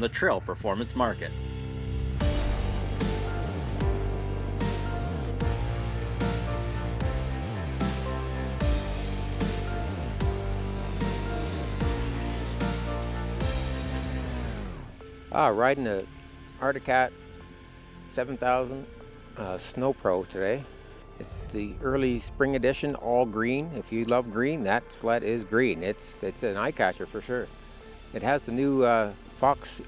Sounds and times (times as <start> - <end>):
Speech: 0.0 - 1.3, 15.3 - 17.1, 18.1 - 27.5, 28.2 - 29.8
Music: 0.0 - 29.8.